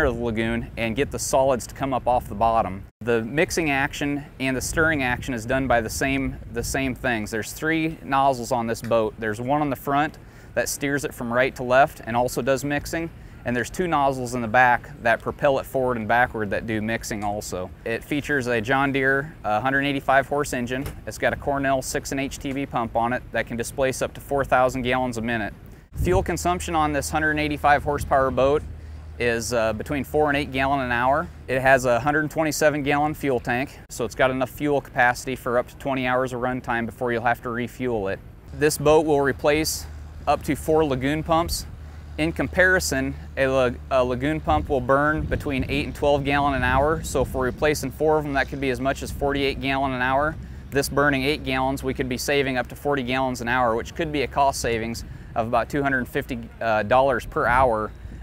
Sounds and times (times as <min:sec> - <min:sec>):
Speech: 0:00.0 - 0:57.9.